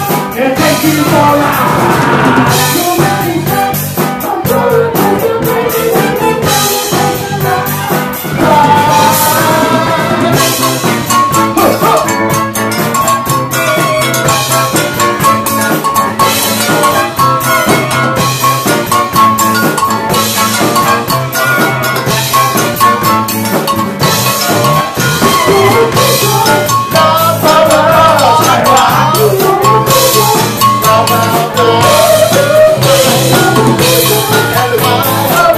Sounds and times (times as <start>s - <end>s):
Steelpan: 5.3s - 35.5s.